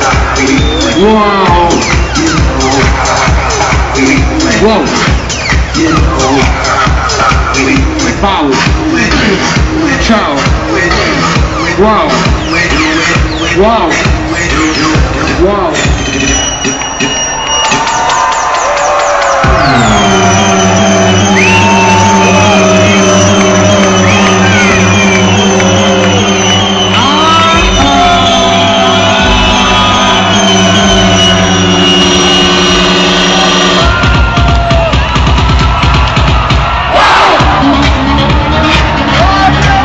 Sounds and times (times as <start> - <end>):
Techno: 0.0 - 39.8.